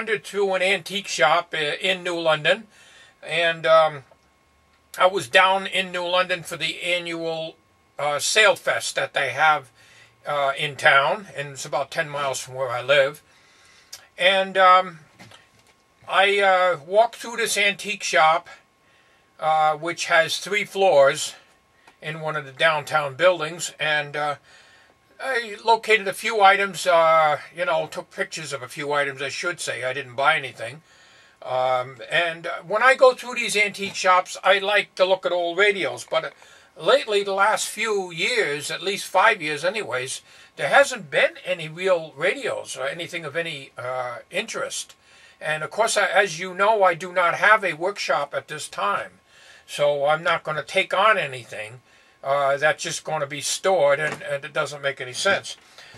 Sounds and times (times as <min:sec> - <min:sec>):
Speech: 0:00.0 - 0:04.1, 0:05.0 - 0:13.2, 0:14.0 - 0:15.1, 0:16.1 - 0:18.6, 0:19.4 - 0:21.4, 0:22.0 - 0:24.4, 0:25.2 - 0:30.8, 0:31.4 - 0:55.6.